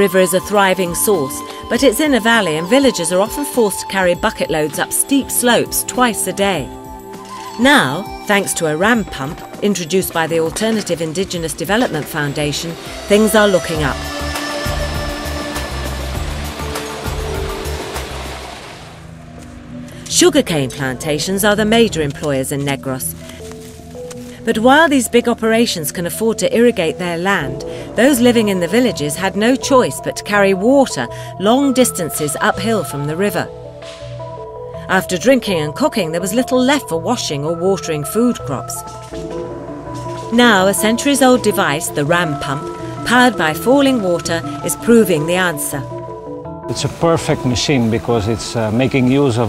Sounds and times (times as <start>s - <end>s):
Speech: 0.0s - 6.7s, 7.6s - 14.0s, 20.1s - 23.1s, 24.5s - 33.5s, 34.9s - 38.8s, 40.3s - 45.9s, 46.7s - 49.4s
Music: 0.0s - 49.4s
Stream: 11.8s - 19.6s.